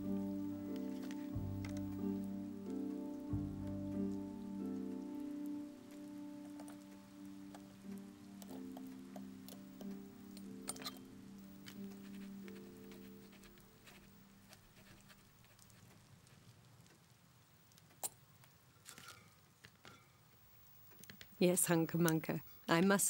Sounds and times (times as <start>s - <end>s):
Music: 0.0s - 14.6s.